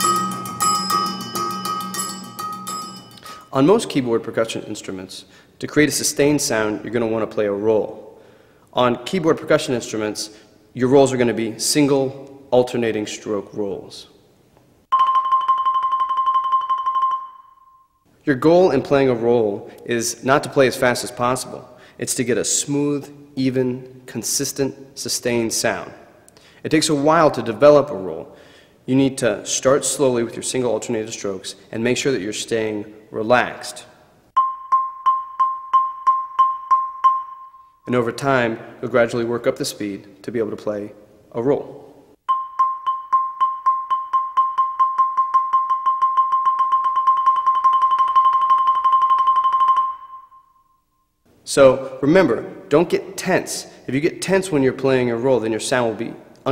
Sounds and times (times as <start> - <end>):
Speech: 3.5 - 8.0, 8.7 - 14.2, 18.3 - 26.0, 26.6 - 28.3, 28.9 - 33.9, 37.9 - 41.8, 51.5 - 56.5.